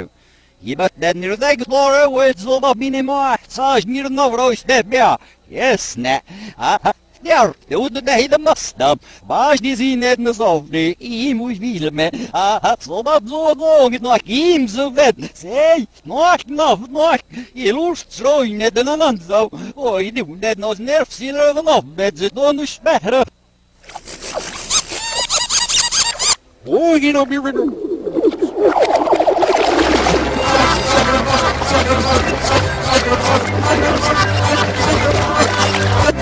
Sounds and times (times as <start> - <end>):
Speech: 0.0 - 23.3, 26.6 - 27.7.